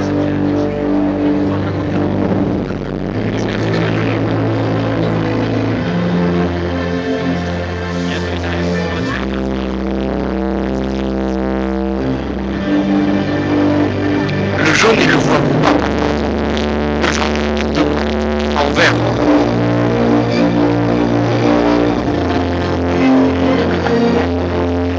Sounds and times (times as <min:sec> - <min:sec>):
Speech: 0:00.0 - 0:06.0, 0:08.1 - 0:09.9, 0:14.6 - 0:16.2, 0:17.0 - 0:19.6
Electronic music: 0:00.0 - 0:24.9.